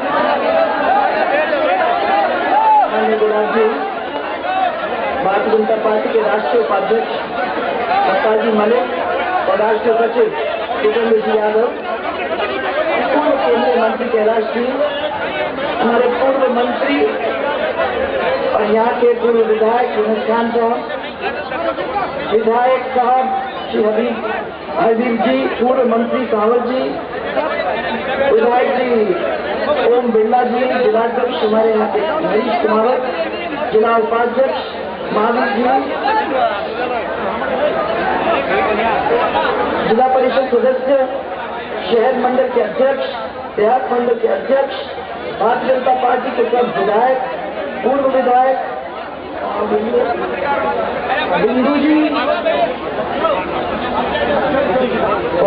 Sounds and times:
Conversation: 0:00.0 - 0:55.4
Narration, monologue: 0:02.8 - 0:04.3, 0:05.1 - 0:12.2, 0:12.9 - 0:17.4, 0:18.2 - 0:37.5, 0:39.0 - 0:55.4
Female speech, woman speaking: 0:02.9 - 0:03.8, 0:05.2 - 0:07.1, 0:09.5 - 0:11.8, 0:13.1 - 0:14.9, 0:15.8 - 0:17.2, 0:18.5 - 0:20.8, 0:29.8 - 0:33.1, 0:33.7 - 0:35.9.

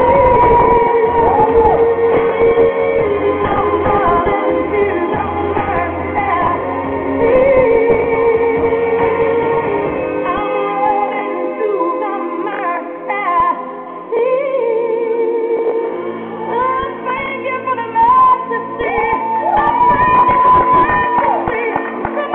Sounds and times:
Music: 0:00.0 - 0:22.3.

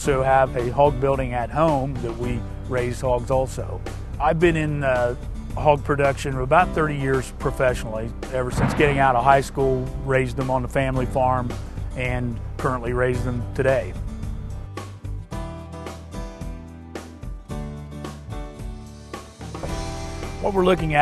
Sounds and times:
Speech: 0:00.0 - 0:14.0, 0:20.4 - 0:21.0
Music: 0:00.0 - 0:21.0.

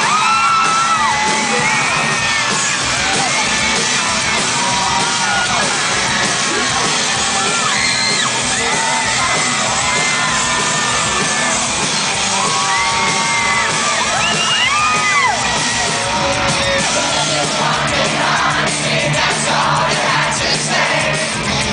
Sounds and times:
Music: 0:00.0 - 0:21.7.

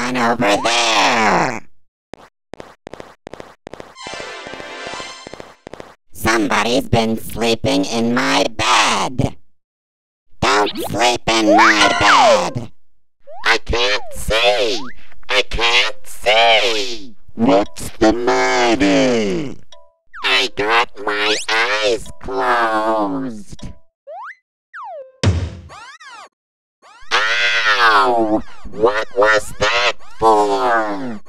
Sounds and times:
Speech: 0:00.0 - 0:01.6, 0:06.2 - 0:09.4, 0:10.4 - 0:12.7, 0:13.4 - 0:19.6, 0:20.2 - 0:23.7, 0:27.1 - 0:31.2.

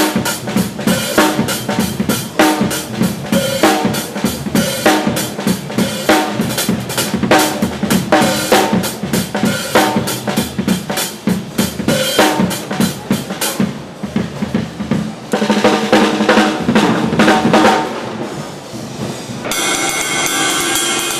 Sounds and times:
Snare drum: 0:00.0 - 0:18.4
Drum kit: 0:00.0 - 0:21.1.

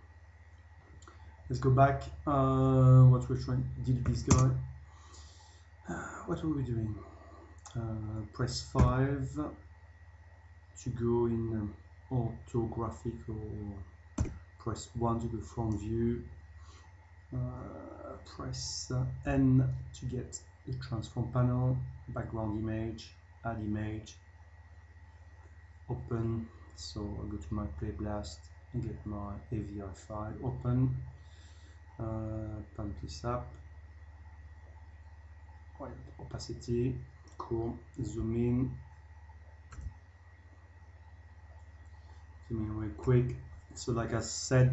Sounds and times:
Speech: 0:01.5 - 0:04.7, 0:05.9 - 0:09.6, 0:10.8 - 0:16.3, 0:17.3 - 0:24.2, 0:25.9 - 0:31.1, 0:32.0 - 0:33.6, 0:35.8 - 0:38.8, 0:42.5 - 0:44.7.

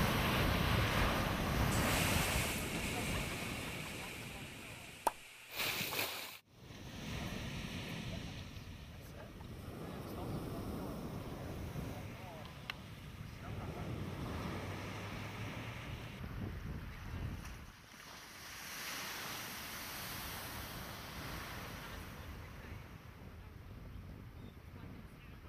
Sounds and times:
Speech: 0:02.6 - 0:05.0, 0:07.3 - 0:12.7, 0:13.3 - 0:14.1, 0:21.8 - 0:25.4.

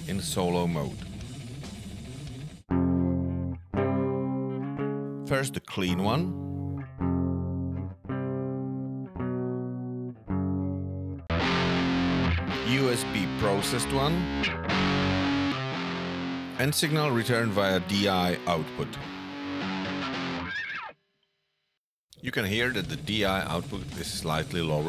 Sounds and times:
Speech: 0:00.0 - 0:01.0, 0:05.3 - 0:06.4, 0:12.6 - 0:14.3, 0:16.6 - 0:19.0, 0:22.2 - 0:24.8
Music: 0:00.0 - 0:21.0, 0:22.2 - 0:24.8.

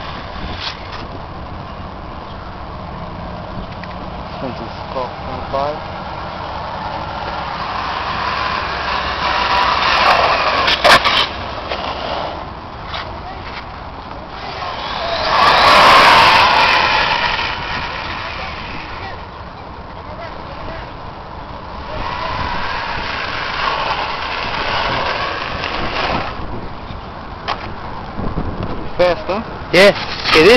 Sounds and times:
Car: 0:00.0 - 0:30.5.

